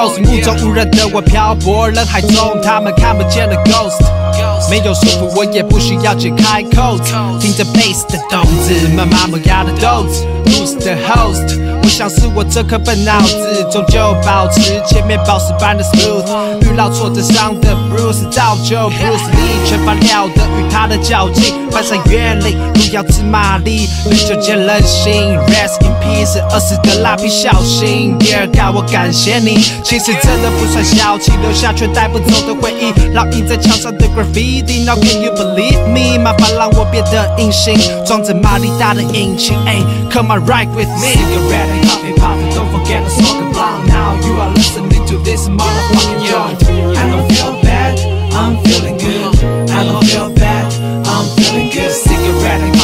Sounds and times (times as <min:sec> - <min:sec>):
Music: 0:00.0 - 0:52.8.